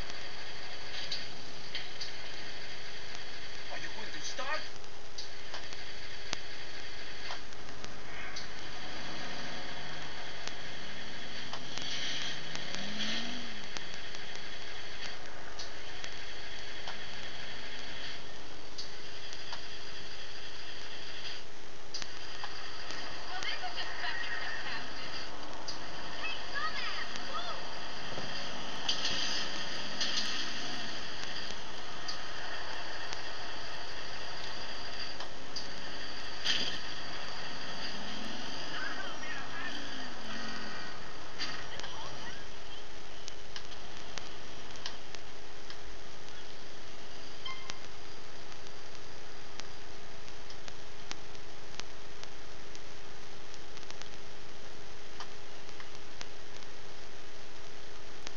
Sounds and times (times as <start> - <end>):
Vehicle: 8.0 - 18.3, 22.0 - 45.1.